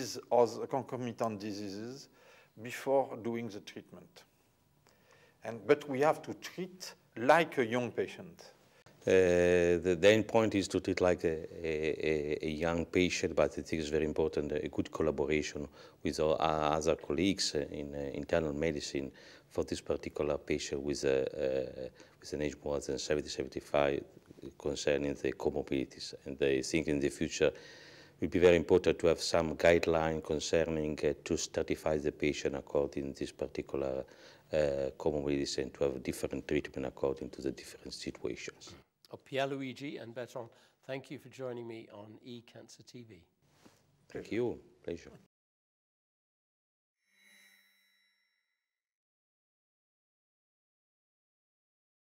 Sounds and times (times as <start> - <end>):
Speech: 0.0 - 4.3, 5.4 - 27.6, 28.2 - 43.3, 44.1 - 45.3.